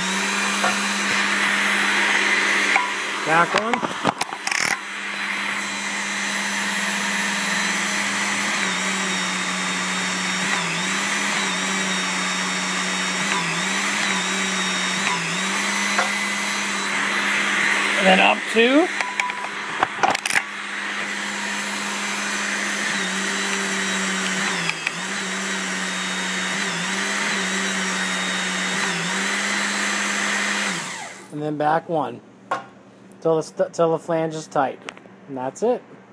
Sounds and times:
Tools: 4.1s - 4.8s, 19.0s - 20.5s, 24.2s - 25.0s.

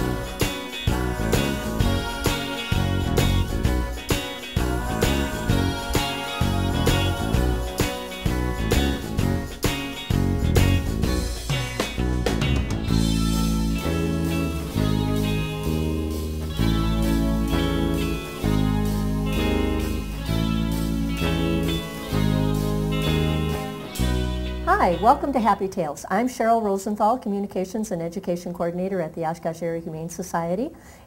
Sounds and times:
Music: 0.0s - 25.9s
Speech: 24.7s - 30.8s.

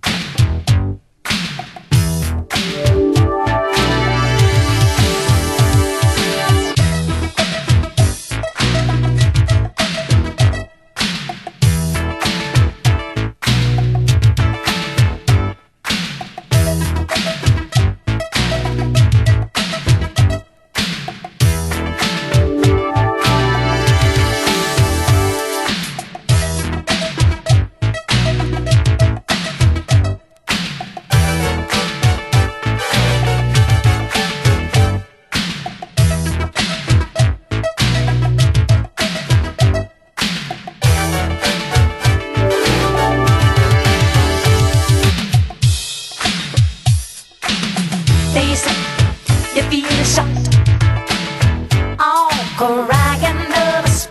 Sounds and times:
Music: 0.0s - 54.1s.

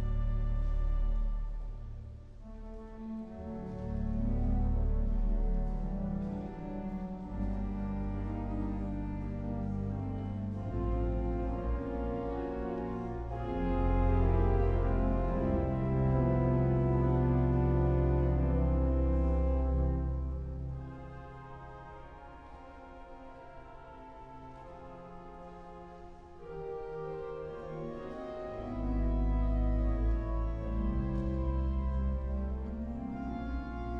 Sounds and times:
Keyboard (musical): 0.0s - 34.0s.

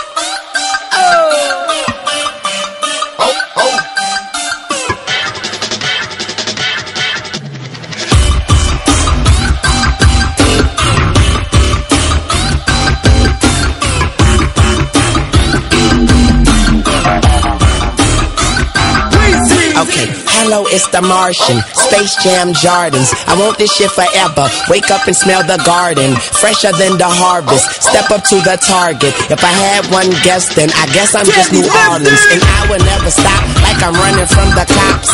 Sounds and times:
Dubstep: 8.0s - 35.1s.

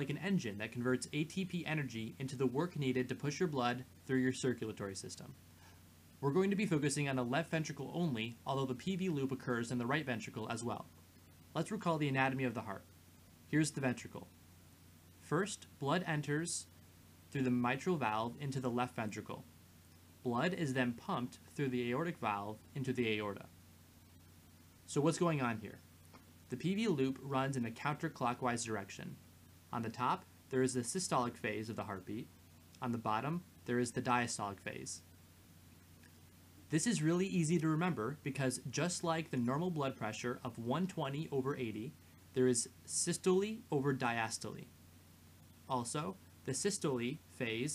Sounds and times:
Speech: 0.0s - 5.4s, 6.2s - 11.0s, 11.6s - 12.9s, 13.5s - 14.3s, 15.2s - 16.7s, 17.3s - 19.5s, 20.2s - 23.5s, 24.9s - 25.8s, 26.5s - 35.1s, 36.7s - 44.7s, 45.7s - 47.7s.

